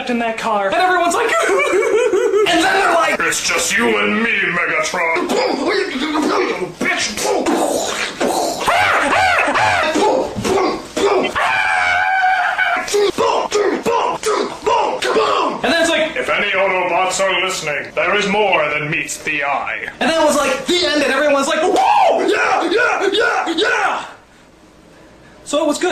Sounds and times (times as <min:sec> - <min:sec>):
Speech: 0:02.4 - 0:08.1, 0:12.8 - 0:24.2, 0:25.5 - 0:25.9.